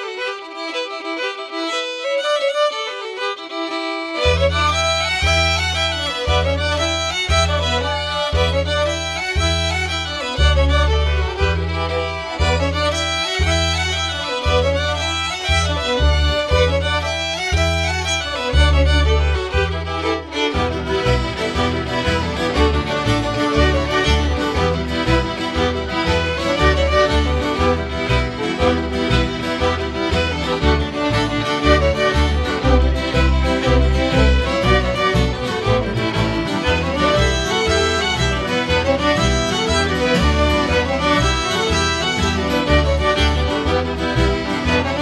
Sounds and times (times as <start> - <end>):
Music: 0.0 - 45.0.